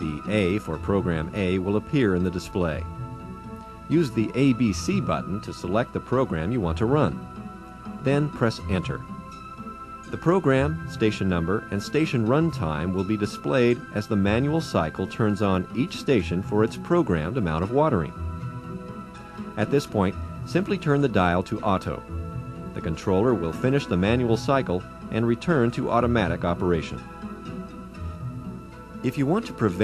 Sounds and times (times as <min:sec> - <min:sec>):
Speech: 0:00.0 - 0:02.9, 0:03.9 - 0:07.2, 0:08.0 - 0:09.0, 0:10.1 - 0:18.2, 0:19.6 - 0:22.0, 0:22.8 - 0:27.0, 0:29.0 - 0:29.8
Music: 0:00.0 - 0:29.8.